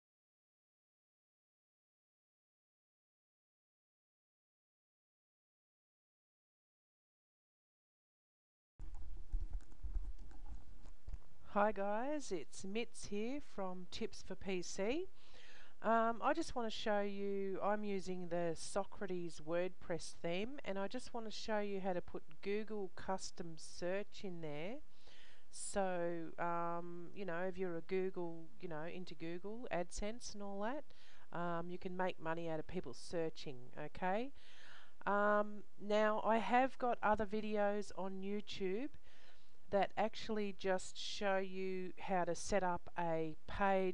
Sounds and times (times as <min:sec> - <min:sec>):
Inside, small room: 0:08.8 - 0:43.9
Speech: 0:11.5 - 0:15.1, 0:15.8 - 0:24.8, 0:25.5 - 0:34.4, 0:35.1 - 0:39.0, 0:39.7 - 0:43.9.